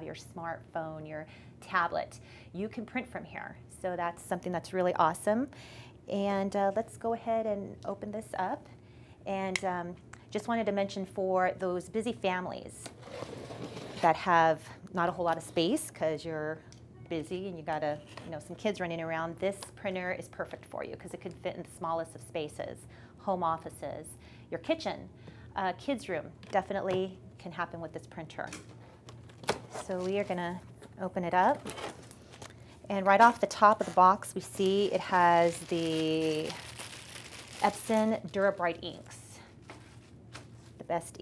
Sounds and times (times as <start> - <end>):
Speech: 0.0 - 5.5, 6.1 - 8.7, 9.3 - 12.9, 14.0 - 28.6, 32.9 - 36.6, 37.6 - 39.5, 40.8 - 41.2.